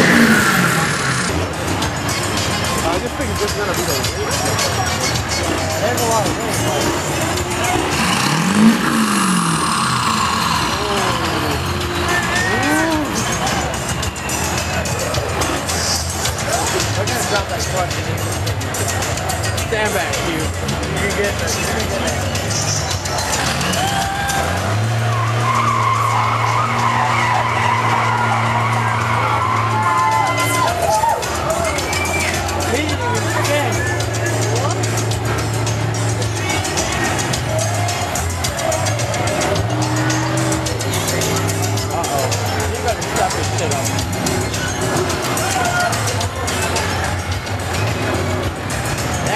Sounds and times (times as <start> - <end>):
Car: 0.0 - 49.3
Music: 0.0 - 49.3
Speech: 2.6 - 8.3, 10.6 - 24.5, 30.4 - 35.2, 36.0 - 39.6, 40.8 - 47.4, 49.2 - 49.3.